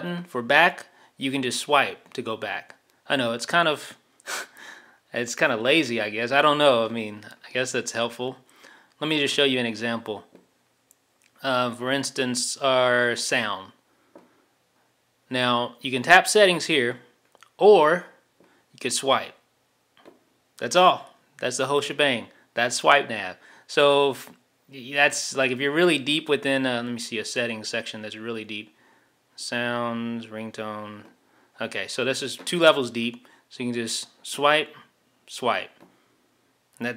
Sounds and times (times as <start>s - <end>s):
Speech: 0.0s - 4.0s, 5.1s - 8.4s, 9.0s - 10.3s, 11.4s - 13.8s, 15.3s - 18.2s, 18.8s - 19.4s, 20.6s - 28.7s, 29.4s - 35.8s
Inside, small room: 0.0s - 36.9s.